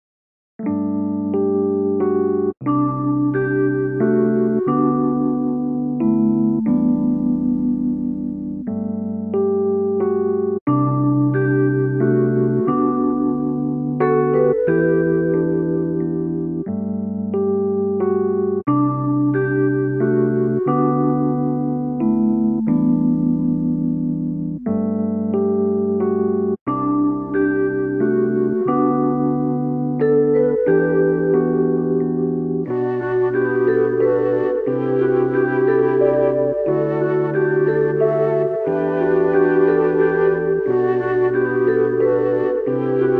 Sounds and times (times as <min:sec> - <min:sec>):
Music: 0:00.6 - 0:43.1.